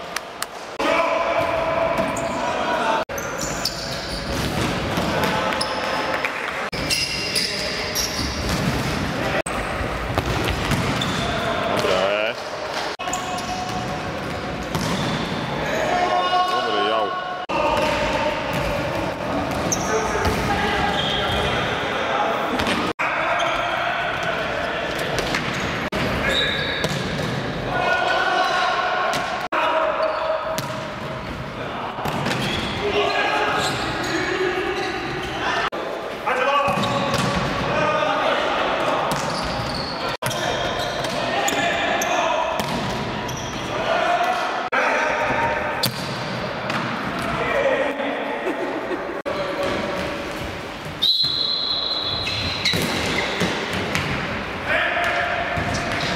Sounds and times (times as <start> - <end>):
Inside, large room or hall: 0.0 - 56.1
Speech: 15.6 - 19.0, 32.8 - 39.2, 43.7 - 45.7, 47.2 - 48.6.